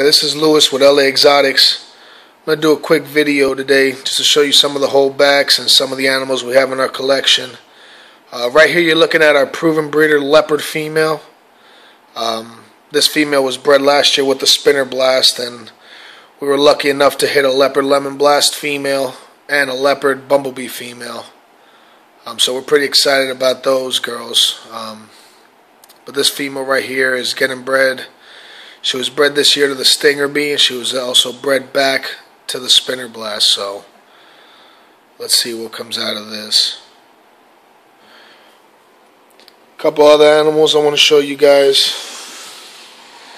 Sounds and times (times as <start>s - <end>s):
Speech: 0.0s - 7.7s, 8.3s - 11.4s, 12.2s - 15.8s, 16.4s - 21.4s, 22.2s - 25.2s, 25.9s - 28.2s, 28.8s - 33.9s, 35.2s - 36.9s, 39.8s - 42.1s
Inside, small room: 0.0s - 43.3s.